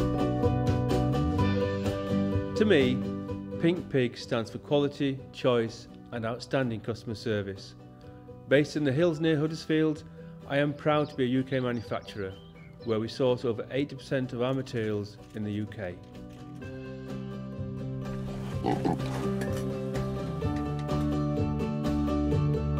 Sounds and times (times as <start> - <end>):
Music: 0.0 - 22.7
Speech: 2.6 - 3.0, 3.6 - 7.7, 8.5 - 16.0.